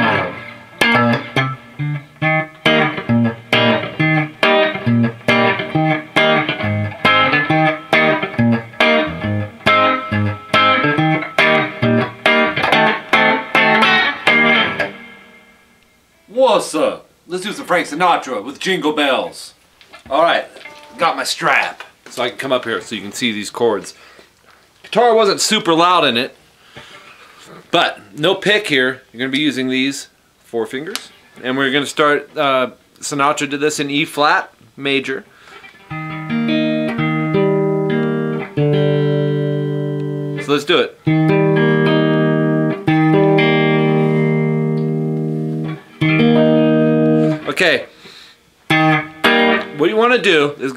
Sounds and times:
Music: 0:00.0 - 0:16.3, 0:20.6 - 0:21.1, 0:35.5 - 0:47.6, 0:48.7 - 0:50.0
Speech: 0:16.3 - 0:24.0, 0:24.9 - 0:26.4, 0:27.4 - 0:35.3, 0:40.4 - 0:41.0, 0:47.4 - 0:47.9, 0:49.8 - 0:50.7.

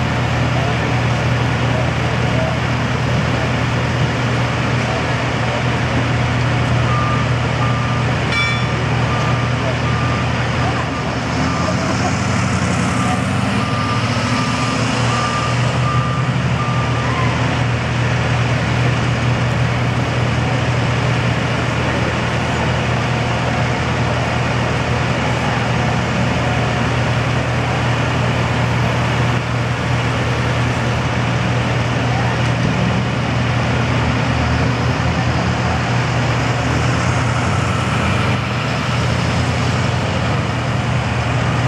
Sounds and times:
Vehicle: 0:00.0 - 0:41.6.

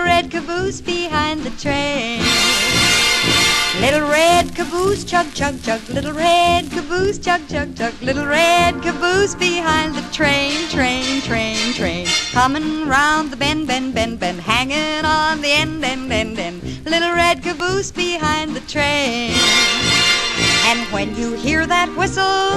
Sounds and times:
Music: 0:00.0 - 0:22.5.

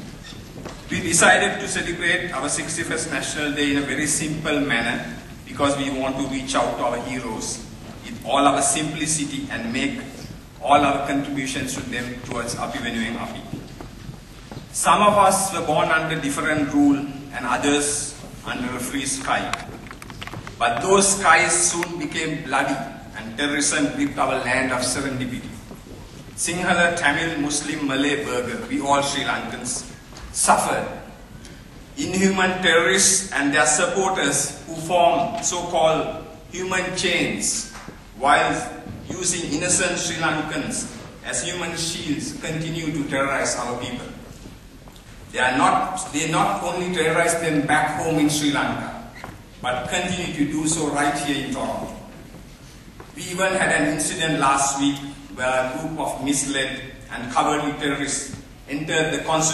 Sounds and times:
Narration, monologue: 0:00.0 - 0:59.5
Male speech, man speaking: 0:00.9 - 0:13.6, 0:14.8 - 0:19.7, 0:20.6 - 0:25.6, 0:26.4 - 0:31.1, 0:32.0 - 0:44.2, 0:45.3 - 0:52.1, 0:53.2 - 0:59.5.

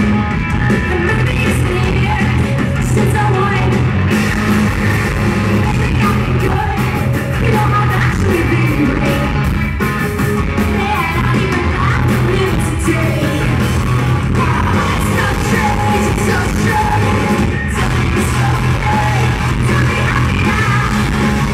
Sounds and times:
Music: 0:00.0 - 0:21.5.

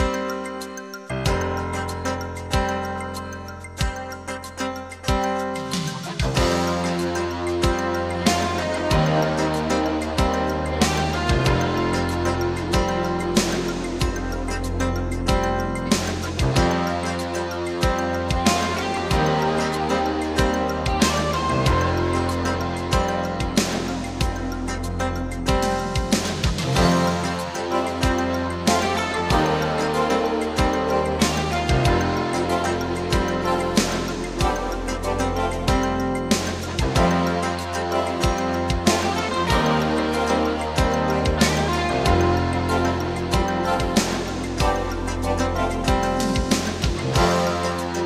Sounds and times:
Music: 0:00.0 - 0:48.0.

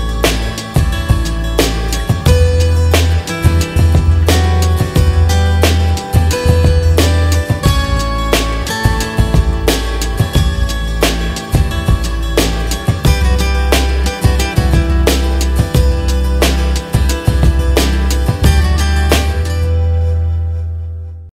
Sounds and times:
Music: 0:00.0 - 0:21.3.

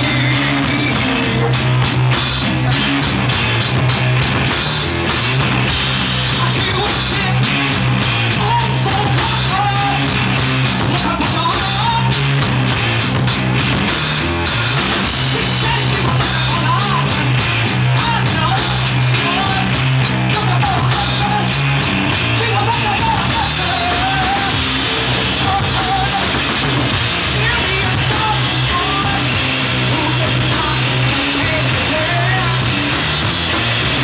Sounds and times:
Drum: 0:00.0 - 0:34.0
Drum kit: 0:00.0 - 0:34.0
Rock music: 0:00.0 - 0:34.0.

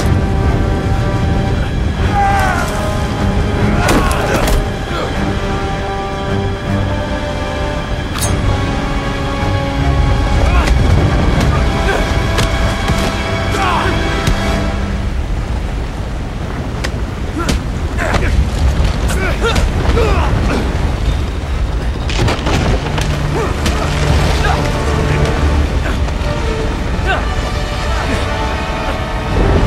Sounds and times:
Music: 0:00.0 - 0:15.6, 0:19.1 - 0:29.6.

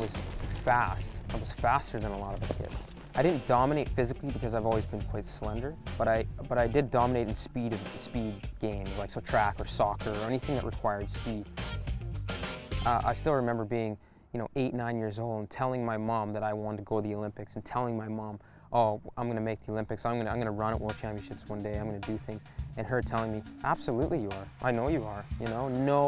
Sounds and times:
Run: 0:00.0 - 0:01.4
Outside, urban or manmade: 0:00.0 - 0:10.6
Male speech, man speaking: 0:00.0 - 0:11.5, 0:12.8 - 0:26.0
Music: 0:00.0 - 0:13.5, 0:20.0 - 0:26.0.

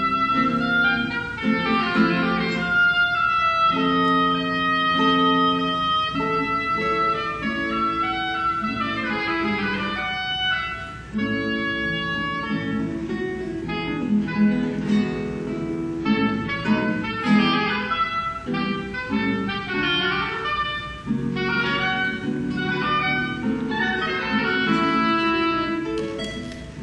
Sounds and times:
Guitar: 0:00.0 - 0:26.8.

